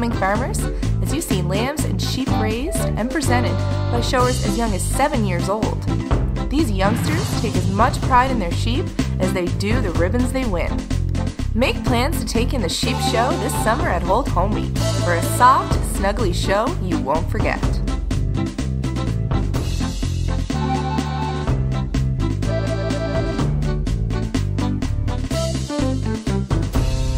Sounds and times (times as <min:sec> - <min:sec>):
Speech: 0:00.0 - 0:05.9, 0:06.5 - 0:10.8, 0:11.6 - 0:17.8
Music: 0:00.0 - 0:27.1.